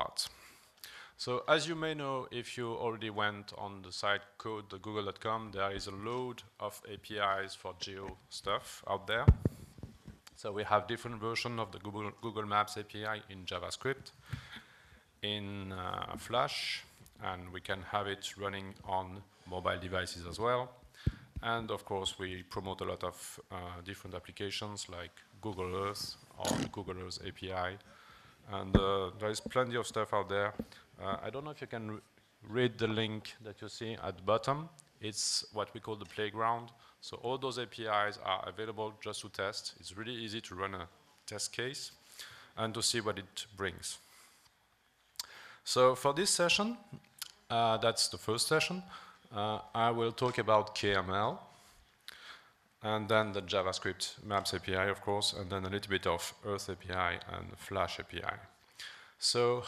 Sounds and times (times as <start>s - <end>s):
Speech: 0.0s - 0.4s, 1.2s - 9.4s, 10.3s - 14.2s, 15.2s - 20.8s, 21.4s - 27.9s, 28.5s - 42.0s, 42.6s - 44.0s, 45.7s - 51.5s, 52.8s - 58.6s, 59.2s - 59.6s.